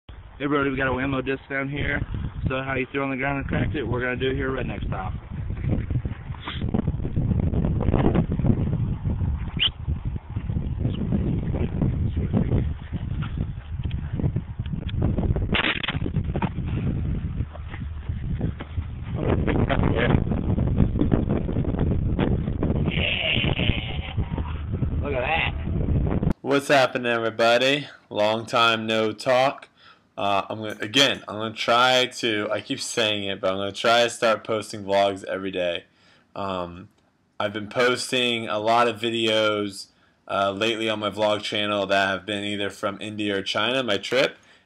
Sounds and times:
Outside, rural or natural: 0.1 - 44.6
Speech: 0.4 - 5.2, 26.4 - 35.8, 36.4 - 44.4.

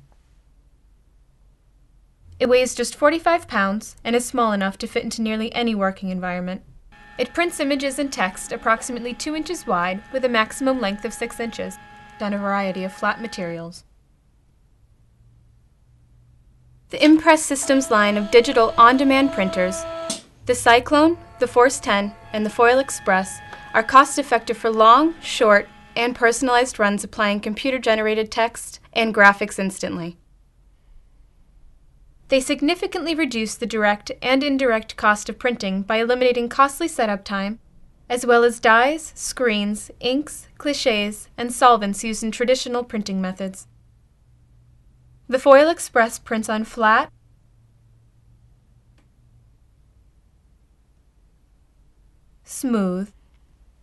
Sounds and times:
Speech: 2.4 - 13.9, 16.9 - 19.8, 20.5 - 30.2, 32.3 - 43.7, 45.3 - 47.1, 52.5 - 53.2
Printer: 7.0 - 13.6, 17.6 - 27.6.

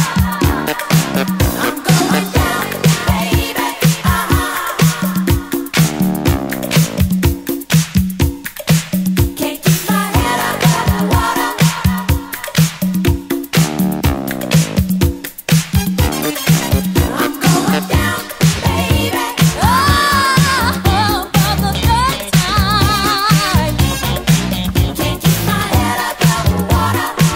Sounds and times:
Disco: 0.0 - 27.3
Funk: 0.0 - 27.3.

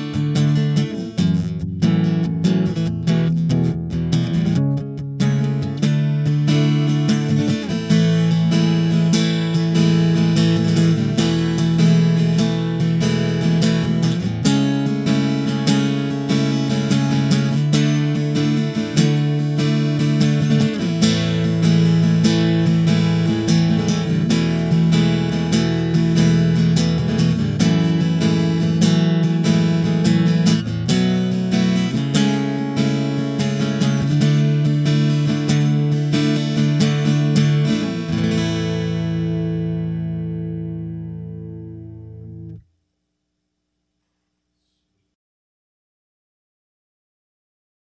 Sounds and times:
Acoustic guitar: 0.0 - 42.7.

